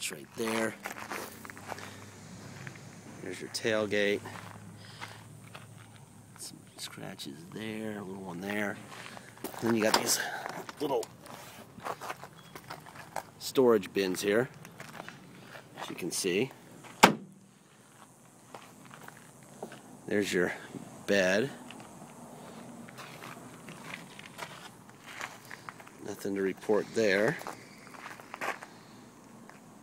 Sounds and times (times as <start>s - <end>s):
Speech: 0.0s - 0.8s, 3.2s - 4.3s, 6.4s - 8.8s, 9.6s - 11.1s, 13.4s - 14.5s, 15.8s - 16.5s, 20.1s - 21.6s, 26.0s - 27.4s.